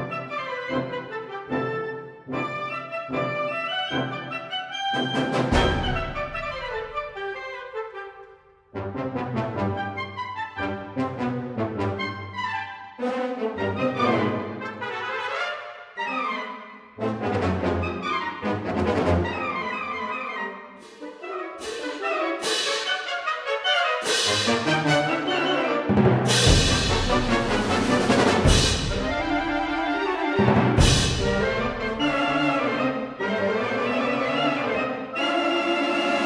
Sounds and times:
Music: 0.0 - 36.2.

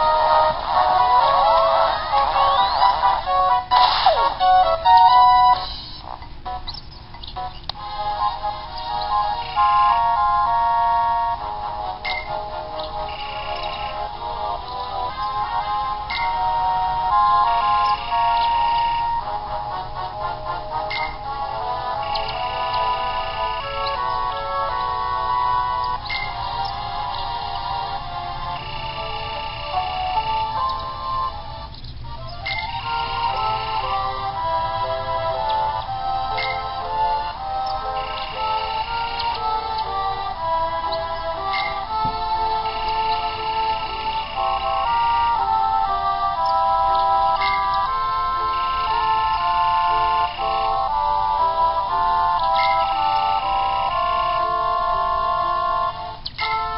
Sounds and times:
Music: 0.0 - 56.7.

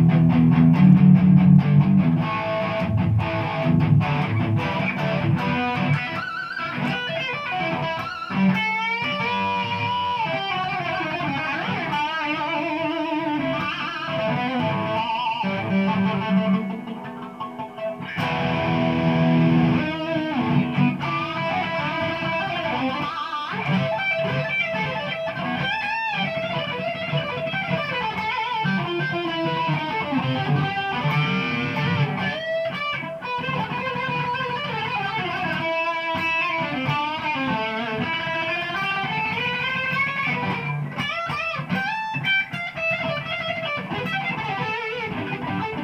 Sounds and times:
Electric guitar: 0.0 - 45.8.

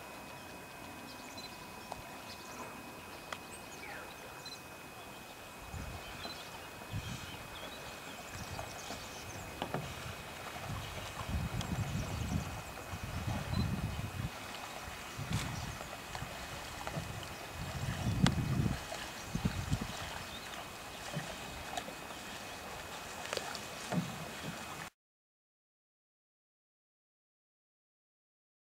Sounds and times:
Rowboat, canoe, kayak: 0.0 - 25.0.

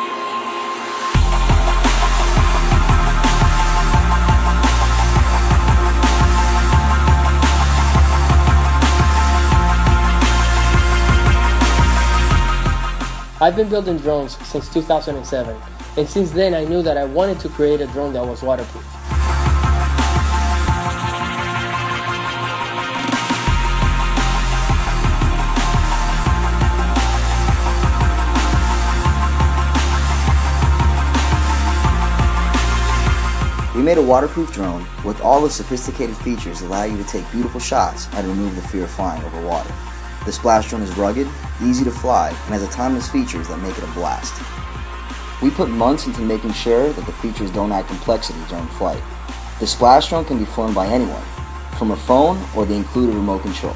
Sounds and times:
Music: 0.0 - 53.7
Speech: 13.4 - 18.8, 33.7 - 44.4, 45.4 - 49.0, 49.6 - 53.7.

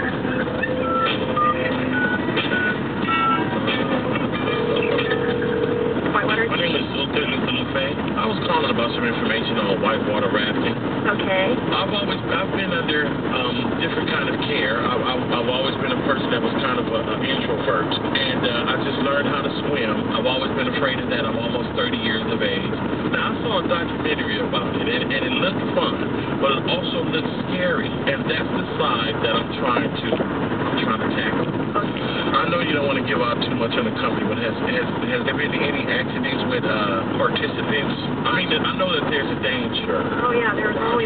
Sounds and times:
Speech: 6.1 - 41.0.

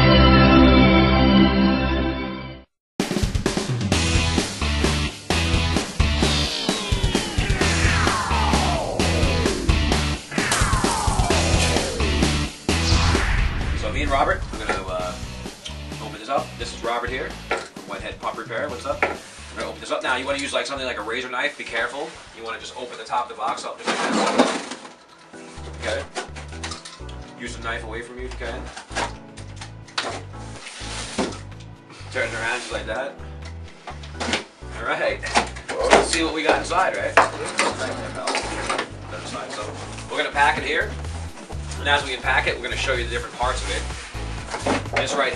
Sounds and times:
Music: 0.0 - 45.3
Speech: 13.8 - 15.2, 16.0 - 24.1, 25.8 - 26.1, 27.4 - 28.7, 32.1 - 33.2, 34.8 - 38.5, 39.1 - 40.9, 41.8 - 43.9, 45.0 - 45.3.

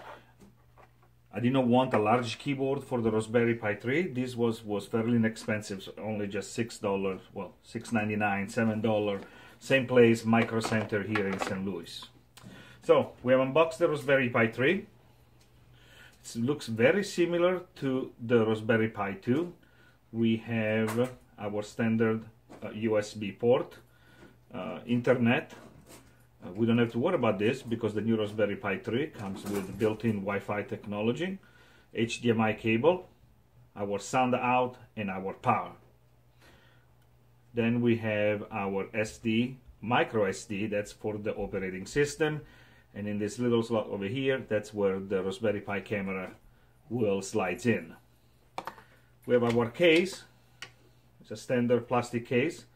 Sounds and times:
Speech: 1.3 - 12.2, 12.8 - 14.9, 16.2 - 23.8, 24.5 - 25.7, 26.4 - 33.1, 33.7 - 35.9, 37.5 - 48.0, 49.3 - 50.3, 51.2 - 52.7.

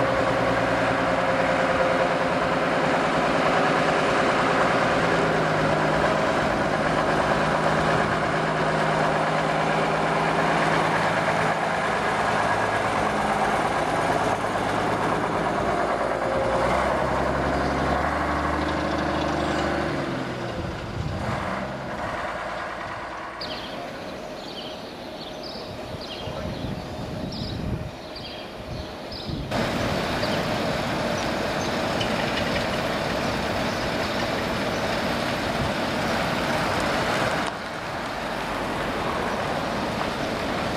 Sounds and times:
Bus: 0.0 - 40.7.

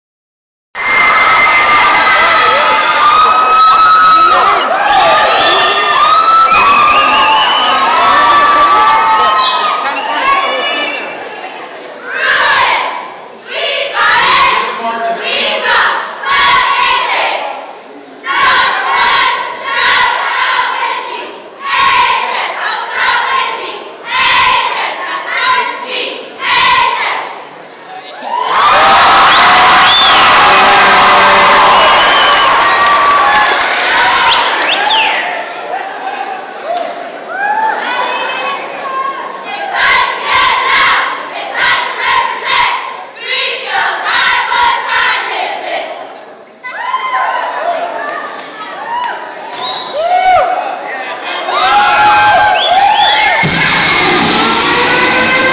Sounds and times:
Inside, public space: 0.7 - 55.5
Speech: 9.7 - 12.8, 13.5 - 16.0.

